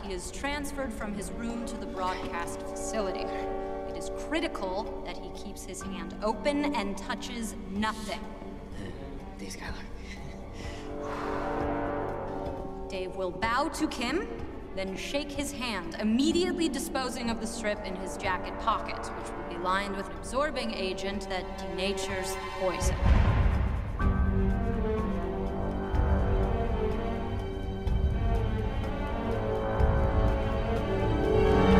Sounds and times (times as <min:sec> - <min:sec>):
Music: 0:00.0 - 0:31.7
Speech: 0:12.9 - 0:23.0.